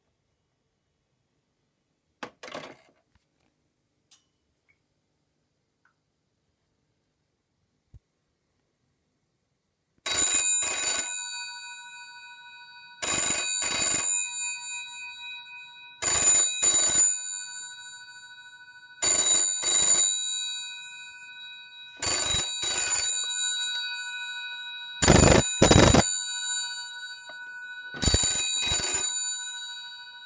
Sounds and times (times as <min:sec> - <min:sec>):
Telephone bell ringing: 0:10.1 - 0:30.2
Ringtone: 0:25.0 - 0:30.2.